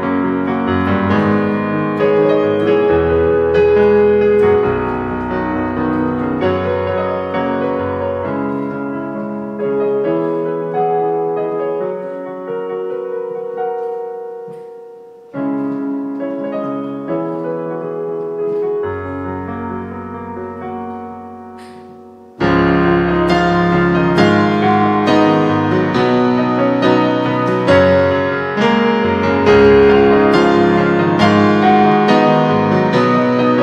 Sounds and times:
Piano: 0.0s - 33.6s.

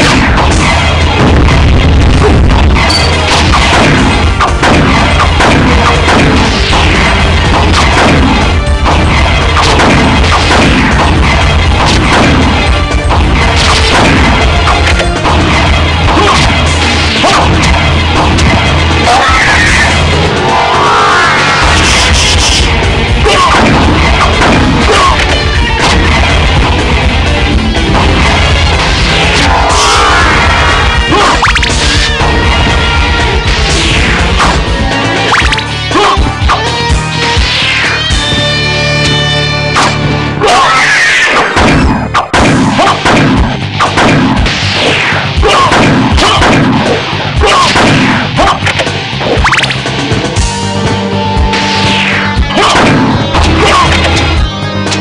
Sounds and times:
Music: 0.0s - 55.0s.

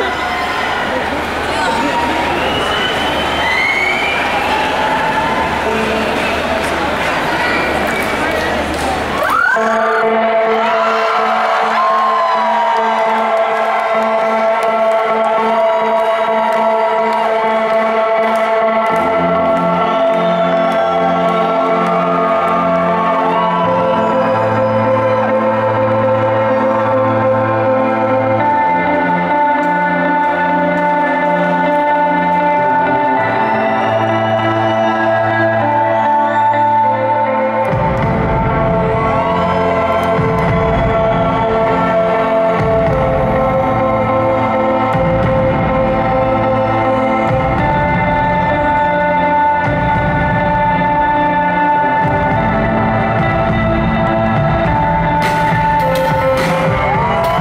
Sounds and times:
Music: 0.0s - 57.4s.

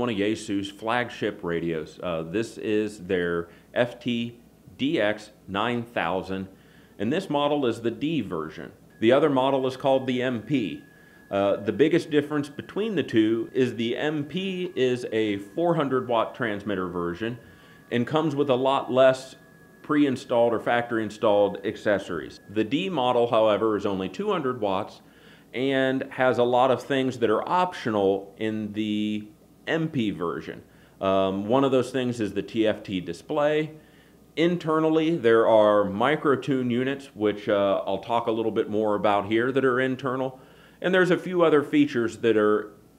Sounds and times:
Speech: 0.0s - 33.8s, 34.4s - 42.8s.

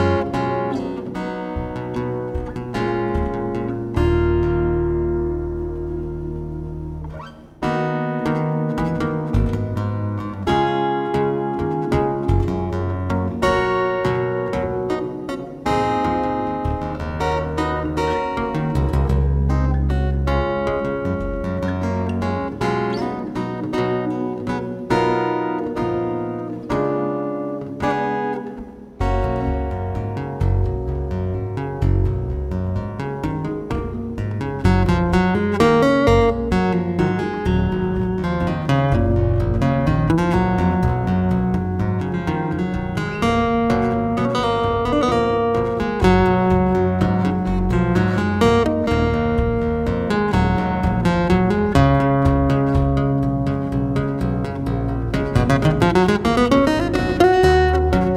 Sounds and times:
Acoustic guitar: 0.0s - 58.1s.

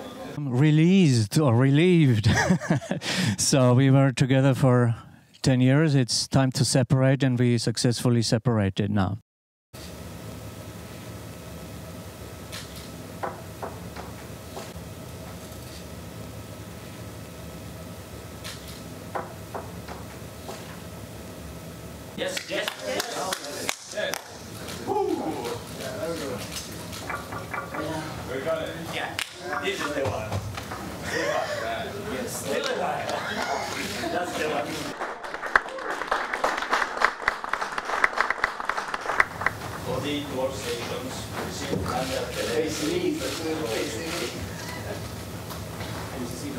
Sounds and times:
Speech: 0.2s - 2.3s, 3.4s - 9.2s, 39.9s - 44.4s
Laughter: 2.1s - 3.2s, 31.0s - 32.0s, 32.9s - 34.5s.

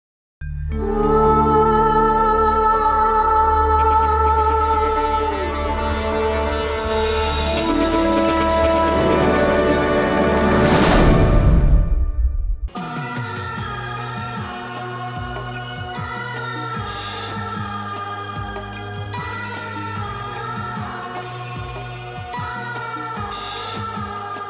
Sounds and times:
Sitar: 0.8s - 11.4s.

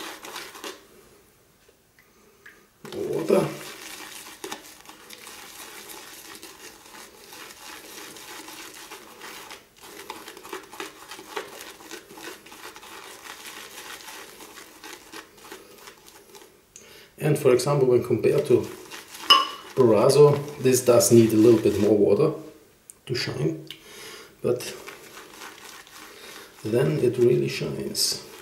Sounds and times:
Speech: 2.9s - 3.6s, 17.2s - 18.8s, 19.8s - 23.7s, 24.4s - 24.8s, 26.6s - 28.3s.

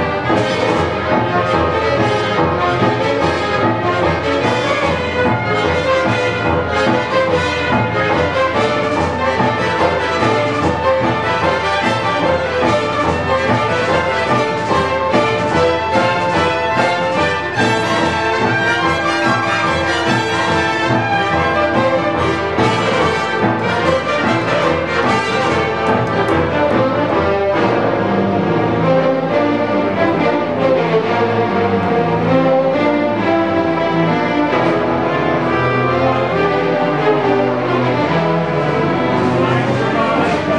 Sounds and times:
Music: 0.0s - 40.5s.

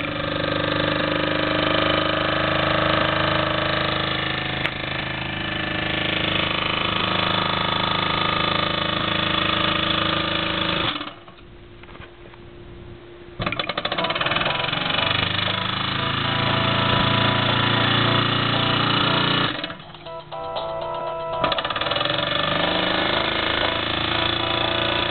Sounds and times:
Engine: 0.0s - 12.2s, 13.4s - 20.3s, 20.9s - 25.1s
Music: 14.5s - 22.0s, 22.6s - 25.1s.

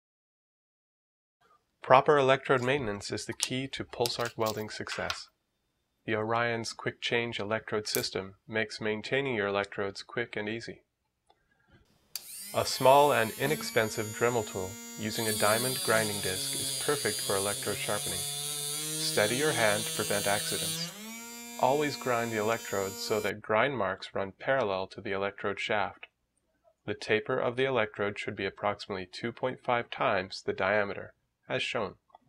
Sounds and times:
Speech: 1.8s - 5.3s, 6.1s - 10.9s, 12.6s - 18.2s, 19.0s - 20.9s, 21.6s - 26.1s, 26.9s - 32.0s
Electric shaver, electric razor: 12.2s - 23.3s.

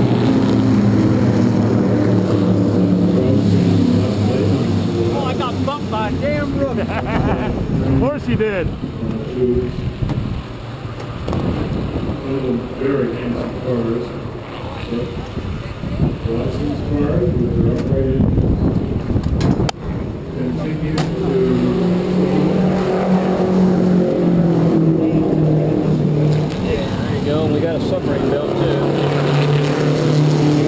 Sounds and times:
Vehicle: 0.0s - 30.6s.

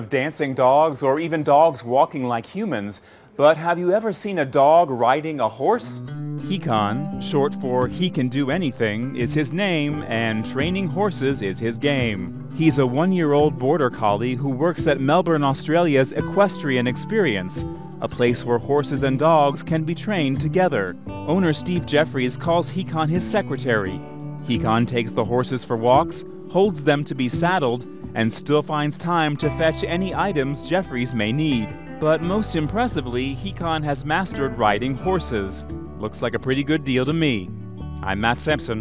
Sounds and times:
Music: 0.0s - 38.8s
Speech: 0.0s - 38.8s.

